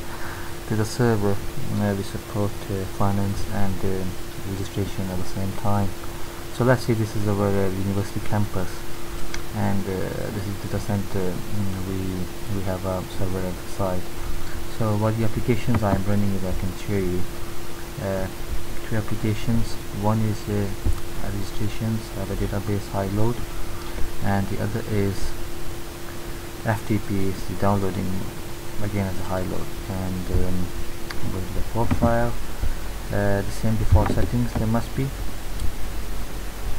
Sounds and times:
Speech: 0.7s - 6.0s, 6.6s - 8.8s, 9.5s - 14.1s, 14.7s - 17.3s, 18.0s - 23.4s, 24.2s - 25.4s, 26.6s - 32.4s, 33.1s - 35.2s.

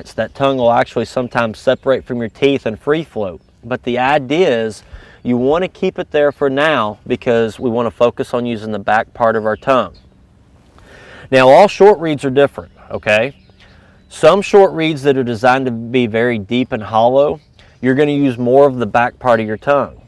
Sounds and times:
Speech: 0.0s - 10.0s, 11.3s - 13.4s, 14.1s - 20.0s.

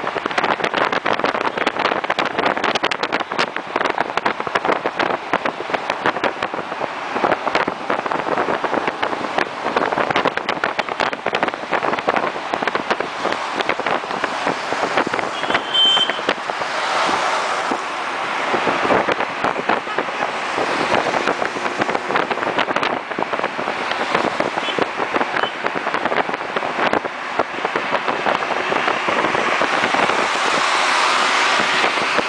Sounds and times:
Car: 0.0s - 32.2s.

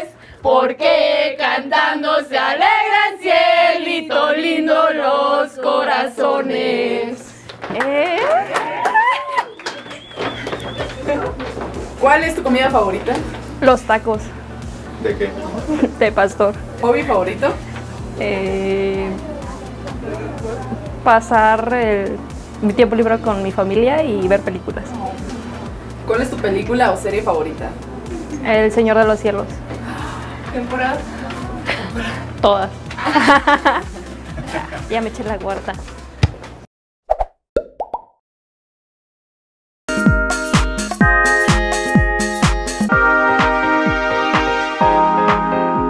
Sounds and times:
Female speech, woman speaking: 7.1s - 8.6s, 11.0s - 11.4s, 12.0s - 14.3s, 15.4s - 17.6s, 18.2s - 29.6s, 30.5s - 32.8s, 34.8s - 35.9s
Music: 9.6s - 36.7s, 39.9s - 45.9s
Plop: 37.1s - 38.2s.

